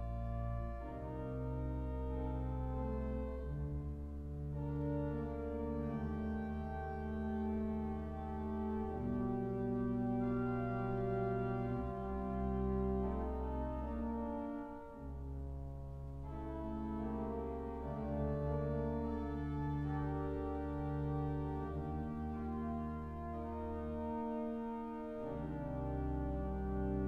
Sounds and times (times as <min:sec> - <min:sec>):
Hammond organ: 0:00.0 - 0:27.0.